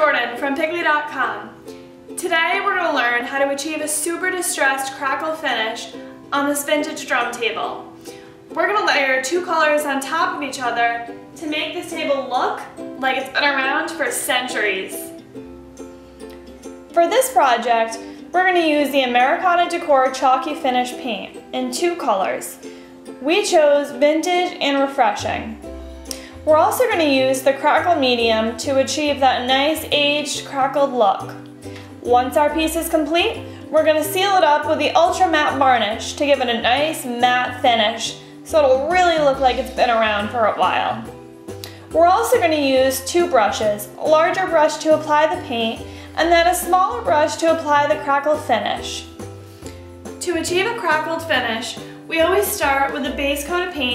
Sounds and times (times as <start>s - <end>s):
Speech: 0.0s - 1.5s, 2.2s - 7.8s, 8.6s - 15.2s, 17.0s - 22.6s, 23.2s - 25.6s, 26.5s - 31.4s, 32.0s - 41.1s, 41.9s - 49.1s, 50.2s - 53.9s
Music: 0.0s - 53.9s.